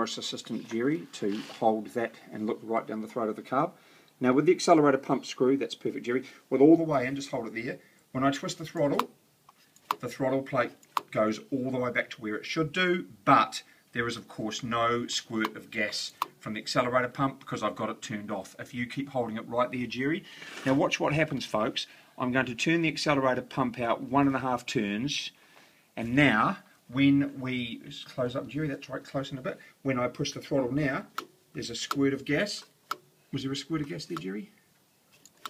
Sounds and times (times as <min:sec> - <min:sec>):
Speech: 0:00.0 - 0:09.2, 0:10.0 - 0:25.4, 0:26.0 - 0:34.6.